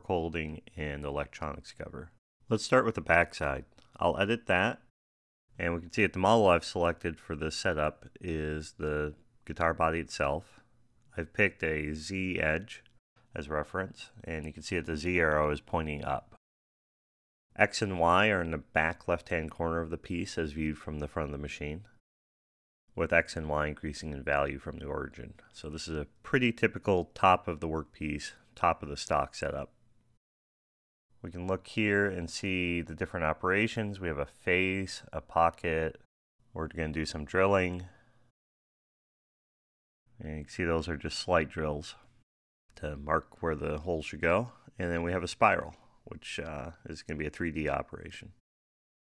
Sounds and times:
Speech: 0.0s - 4.9s, 5.6s - 16.4s, 17.6s - 22.0s, 22.9s - 29.8s, 31.2s - 38.0s, 40.2s - 42.1s, 42.8s - 48.4s.

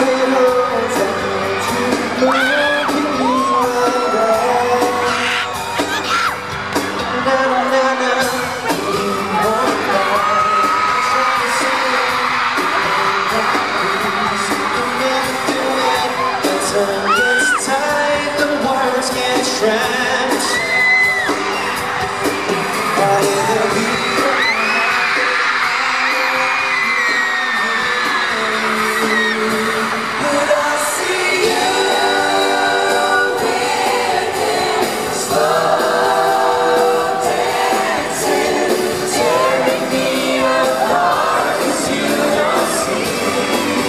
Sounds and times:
Pop music: 0.0s - 43.8s
Singing: 0.0s - 43.8s
Whoop: 2.2s - 6.4s, 15.3s - 17.8s, 20.4s - 21.9s, 23.0s - 29.4s.

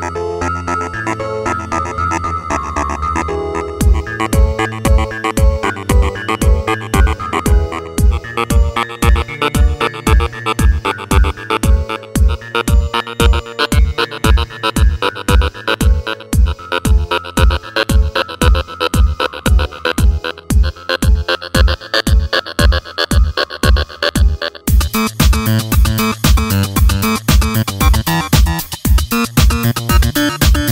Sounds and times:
Techno: 0.0s - 30.7s.

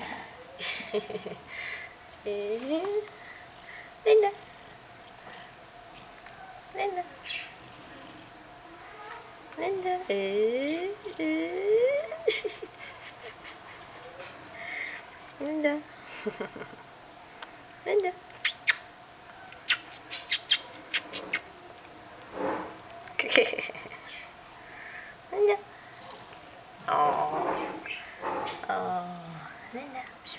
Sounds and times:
Speech: 6.7s - 7.2s, 8.9s - 12.2s, 17.9s - 18.2s.

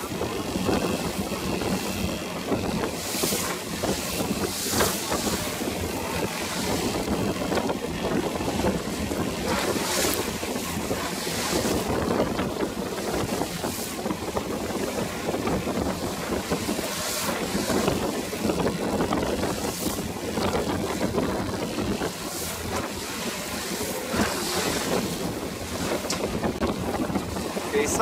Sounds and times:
Rowboat, canoe, kayak: 0.0s - 28.0s
Wind noise (microphone): 0.0s - 28.0s.

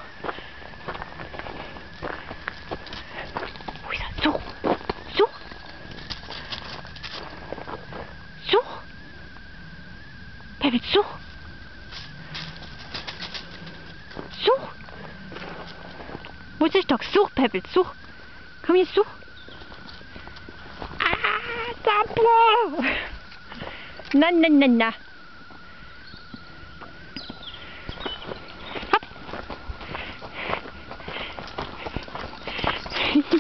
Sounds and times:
Speech: 5.1s - 5.4s, 8.4s - 8.8s, 10.6s - 11.2s, 14.4s - 14.8s, 16.6s - 18.0s, 18.6s - 19.2s, 24.2s - 25.0s.

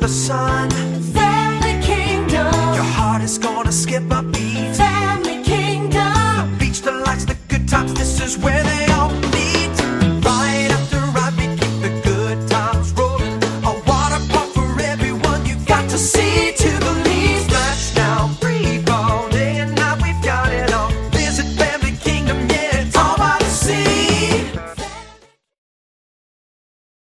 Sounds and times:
Music: 0.0s - 25.6s.

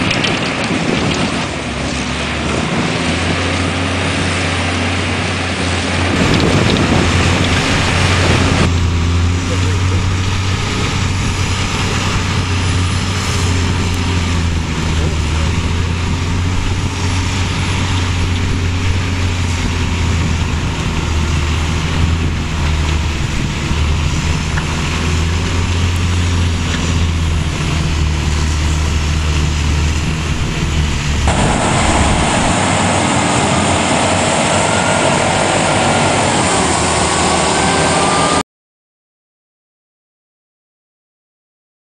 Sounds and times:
Truck: 0.0s - 38.5s.

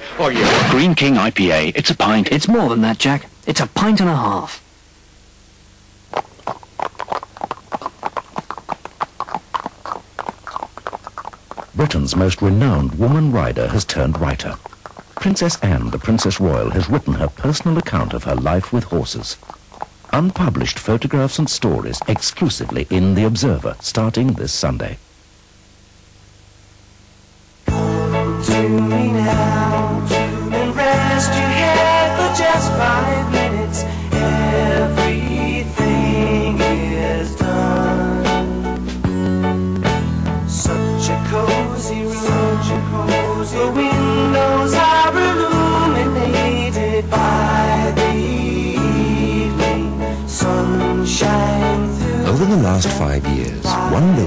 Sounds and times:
Speech: 0.2s - 4.6s, 11.8s - 14.6s, 15.2s - 19.4s, 20.1s - 25.0s, 52.3s - 54.2s.

